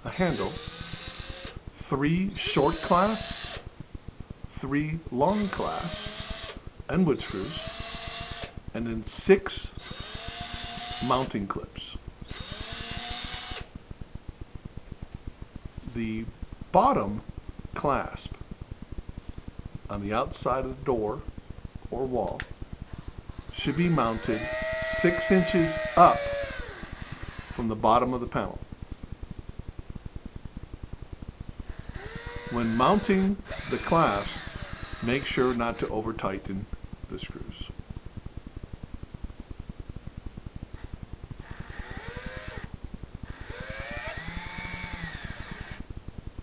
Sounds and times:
Speech: 0.0s - 0.6s, 1.8s - 3.2s, 4.6s - 6.0s, 6.9s - 7.6s, 8.8s - 9.7s, 11.0s - 12.0s, 15.9s - 17.2s, 17.8s - 18.4s, 19.9s - 21.3s, 21.9s - 22.5s, 23.6s - 26.3s, 27.6s - 28.6s, 32.5s - 34.4s, 35.0s - 37.8s.

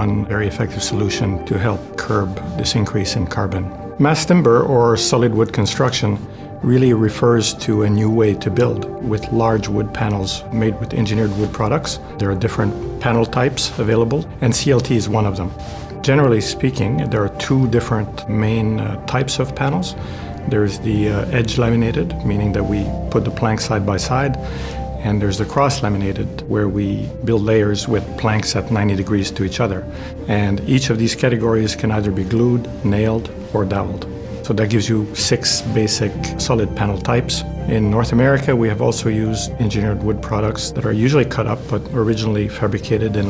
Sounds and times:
Speech: 0.0s - 24.4s, 25.0s - 43.3s
Music: 0.0s - 43.3s.

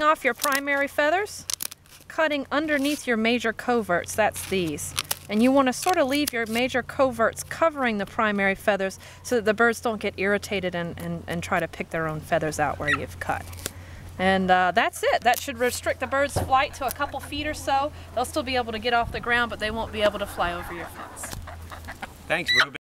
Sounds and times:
Speech: 14.2s - 21.3s, 22.3s - 22.8s.

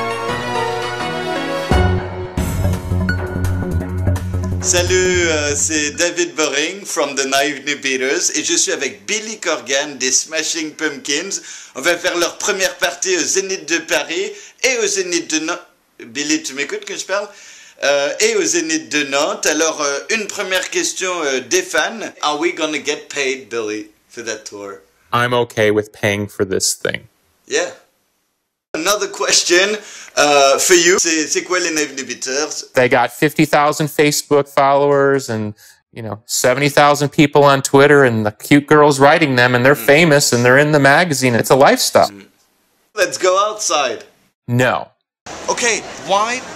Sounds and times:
Speech: 4.6s - 27.9s, 28.8s - 42.3s, 43.0s - 44.9s, 45.5s - 46.5s.

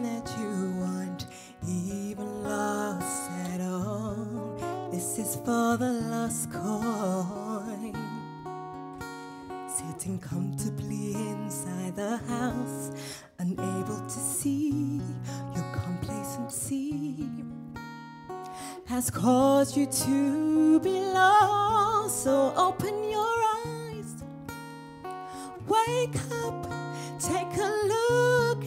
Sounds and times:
Music: 0.0s - 28.6s.

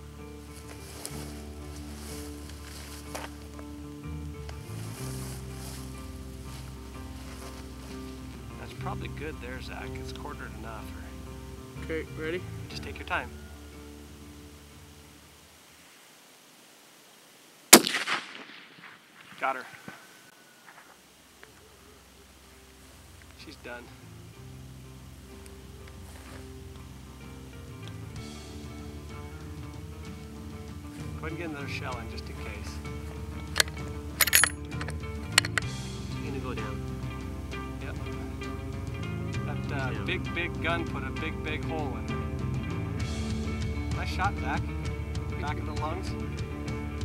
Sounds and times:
Music: 0.0s - 15.6s, 21.5s - 47.0s
Outside, rural or natural: 0.0s - 47.0s
Speech: 8.6s - 11.2s, 11.8s - 13.4s, 19.4s - 19.8s, 23.4s - 24.0s, 31.0s - 32.9s, 36.1s - 36.8s, 37.8s - 38.3s, 39.4s - 42.1s, 43.9s - 44.7s, 45.3s - 46.2s.

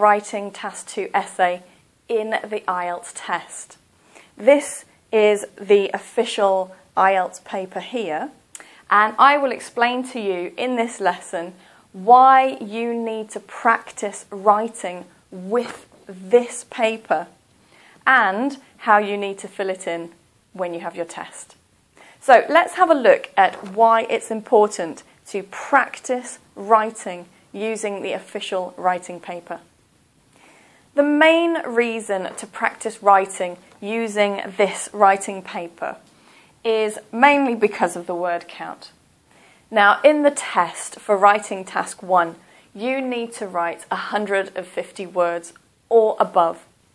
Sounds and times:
Speech: 0.0s - 3.8s, 4.4s - 17.4s, 18.1s - 21.6s, 22.2s - 29.7s, 31.0s - 36.0s, 36.7s - 39.0s, 39.7s - 46.7s.

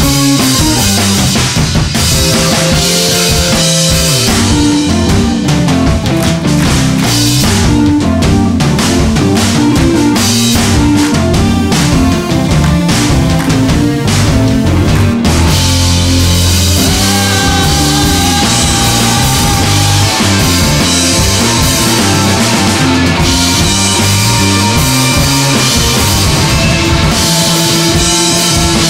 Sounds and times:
Guitar: 0.0s - 28.8s
Heavy metal: 0.0s - 28.8s
Keyboard (musical): 0.0s - 28.8s
Progressive rock: 0.0s - 28.8s.

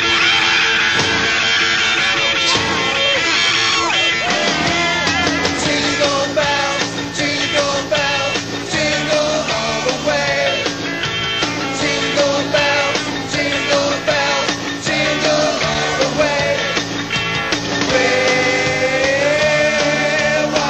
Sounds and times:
Christmas music: 0.0s - 20.7s.

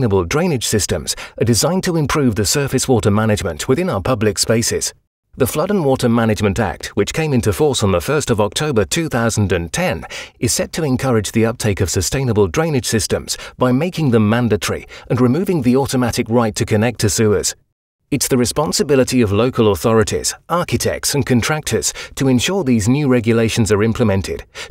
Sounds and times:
Speech: 0.0s - 17.6s, 18.2s - 24.7s.

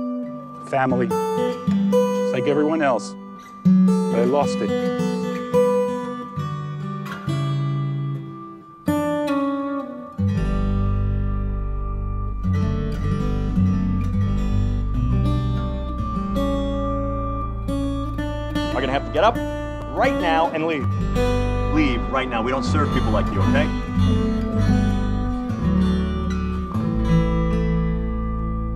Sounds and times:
Acoustic guitar: 0.0s - 28.7s.

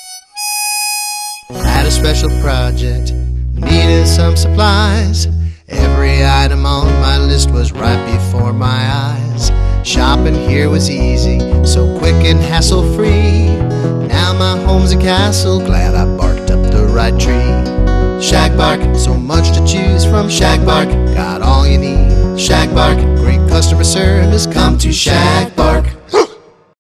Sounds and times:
Music: 0.0s - 26.0s
Bow-wow: 26.1s - 26.6s.

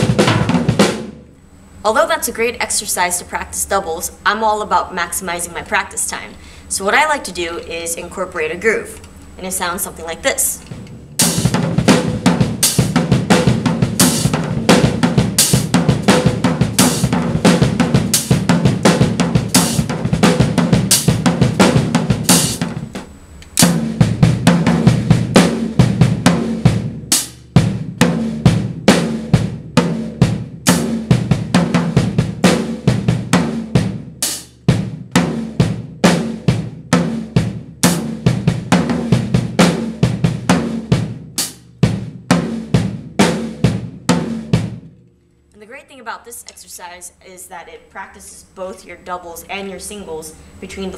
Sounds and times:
Snare drum: 0.0s - 1.2s, 10.7s - 23.0s, 23.6s - 44.9s
Drum kit: 0.0s - 2.6s, 8.8s - 45.1s
Cymbal: 10.6s - 44.8s.

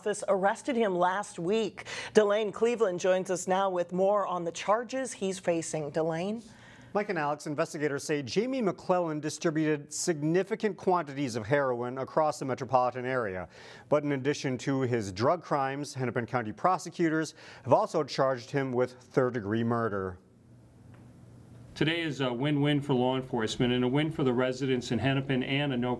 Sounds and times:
Speech: 7.0s - 20.2s, 21.8s - 25.9s.

